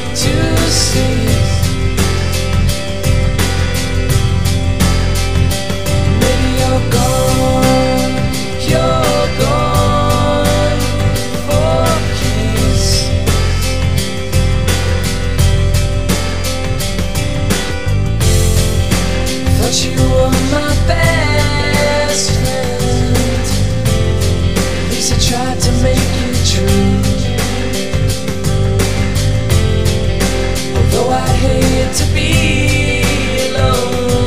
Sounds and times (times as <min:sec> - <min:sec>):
Music: 0:00.0 - 0:34.2.